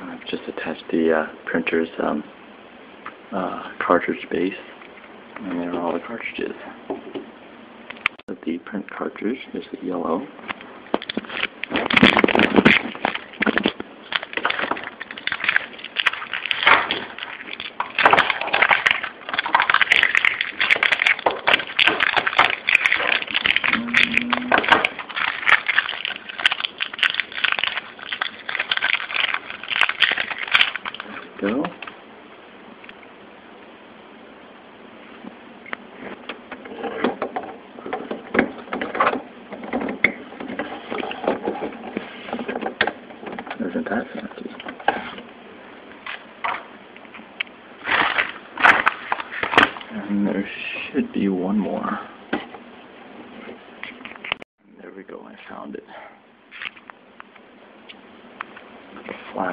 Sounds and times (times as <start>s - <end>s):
Speech: 0.0s - 2.3s, 3.3s - 4.7s, 5.4s - 6.8s, 8.3s - 10.4s, 31.4s - 31.8s, 43.6s - 44.6s, 49.9s - 52.2s, 54.7s - 56.2s, 59.0s - 59.5s.